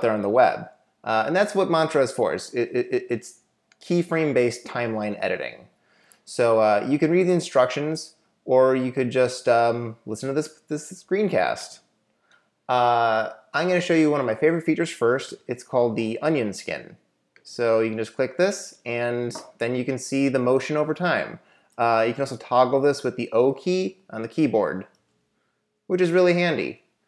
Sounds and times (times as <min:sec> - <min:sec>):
Speech: 0:00.0 - 0:05.7, 0:06.3 - 0:11.9, 0:12.7 - 0:25.0, 0:25.9 - 0:26.9.